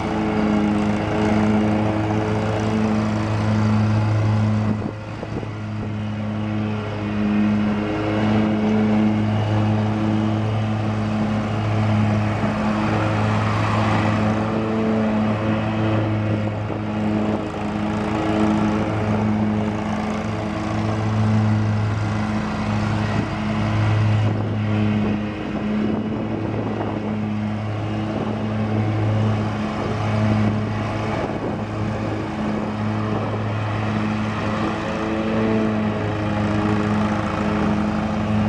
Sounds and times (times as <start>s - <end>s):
Lawn mower: 0.0s - 38.4s
Motorcycle: 0.0s - 38.4s
Accelerating, revving, vroom: 6.8s - 17.5s.